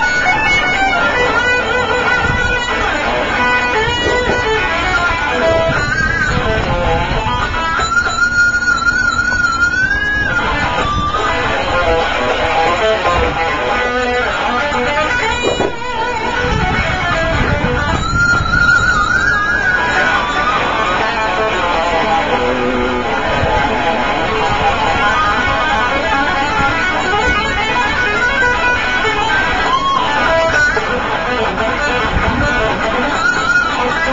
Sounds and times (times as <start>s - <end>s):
Guitar: 0.0s - 34.1s.